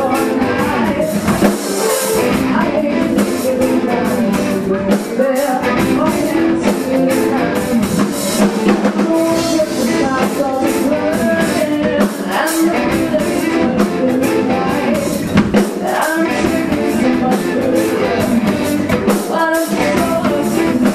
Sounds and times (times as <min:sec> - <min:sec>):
Music: 0:00.0 - 0:20.9.